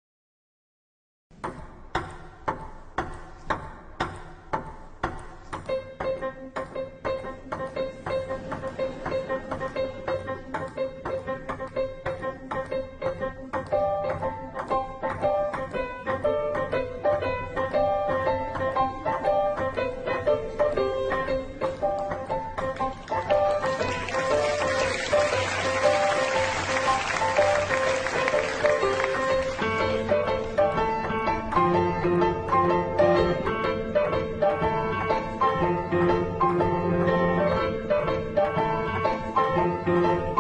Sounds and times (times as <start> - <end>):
Music: 1.3 - 40.4.